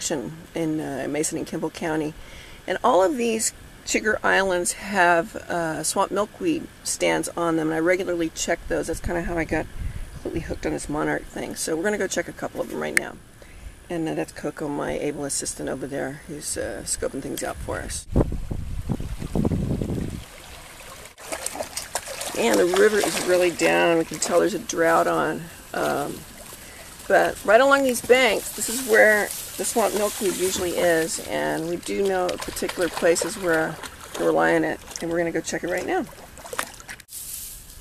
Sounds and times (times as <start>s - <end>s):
Speech: 0.0s - 13.2s, 13.9s - 18.1s, 22.4s - 26.2s, 27.1s - 36.1s.